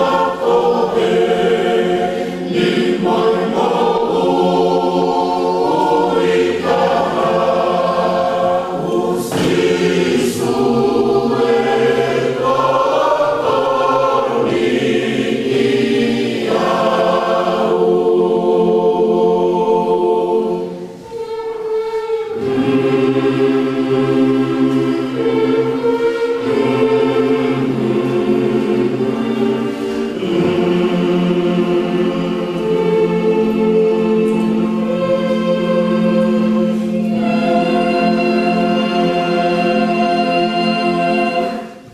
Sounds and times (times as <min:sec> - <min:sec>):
Choir: 0:00.0 - 0:41.9
Vocal music: 0:00.0 - 0:41.9.